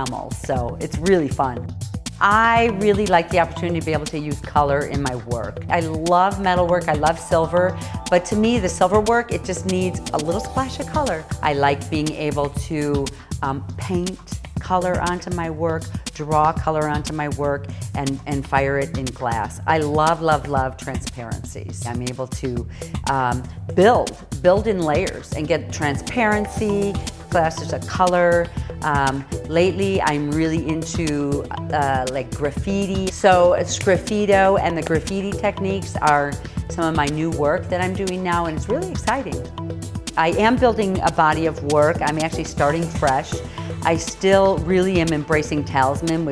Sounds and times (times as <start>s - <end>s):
Speech: 0.0s - 39.4s, 40.2s - 46.3s
Music: 0.0s - 46.3s.